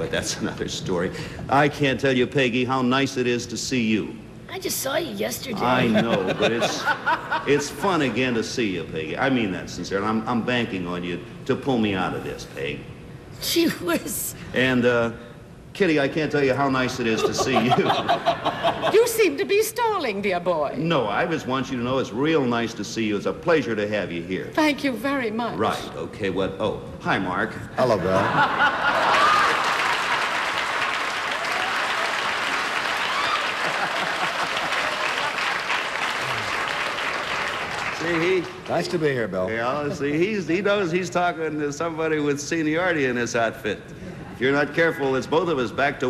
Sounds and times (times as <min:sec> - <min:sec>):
Applause: 0:29.0 - 0:39.0.